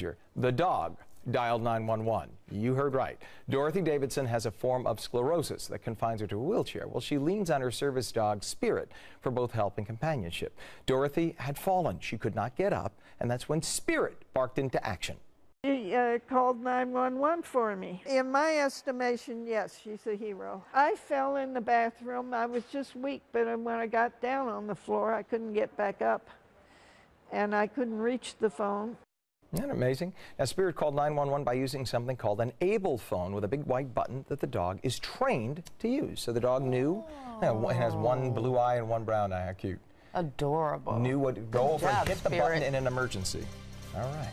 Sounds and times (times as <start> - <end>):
Speech: 29.6 - 34.8, 35.8 - 39.8, 40.4 - 43.4.